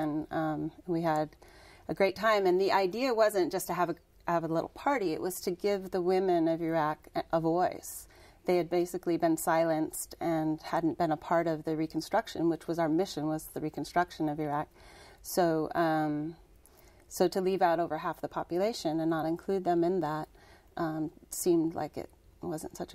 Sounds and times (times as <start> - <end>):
Female speech, woman speaking: 0.0 - 1.3, 1.9 - 14.7, 15.3 - 16.4, 17.1 - 22.9.